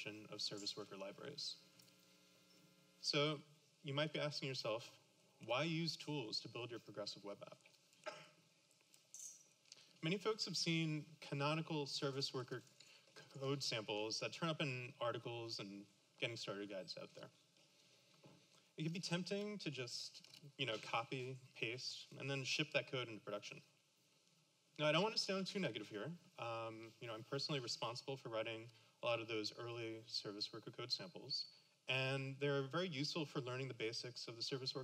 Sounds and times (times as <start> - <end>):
Speech: 0.0 - 1.7, 3.0 - 7.7, 10.0 - 17.4, 18.8 - 23.7, 24.8 - 34.8.